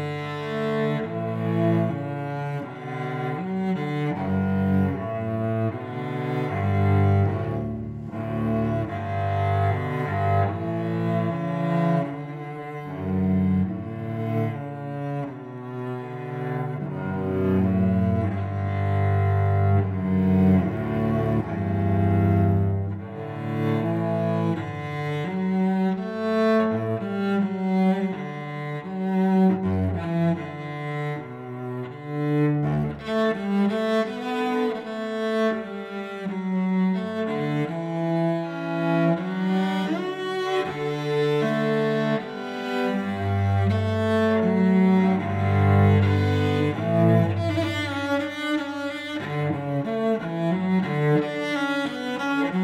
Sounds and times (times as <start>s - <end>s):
Cello: 0.0s - 52.6s.